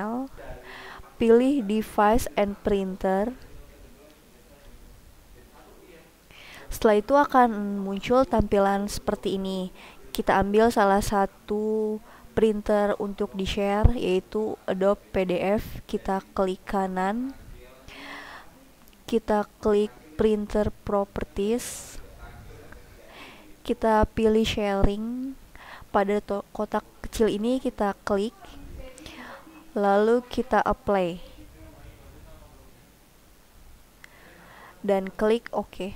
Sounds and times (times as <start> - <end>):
Speech: 0.0 - 17.9, 18.5 - 32.8, 34.3 - 35.9.